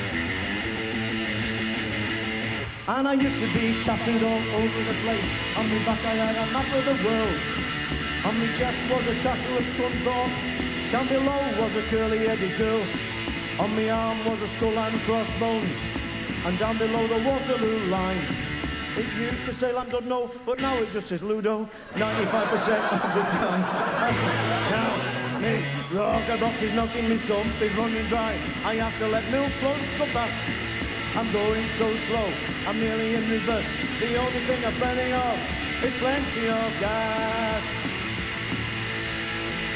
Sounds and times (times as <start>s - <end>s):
Rock and roll: 0.0s - 39.7s.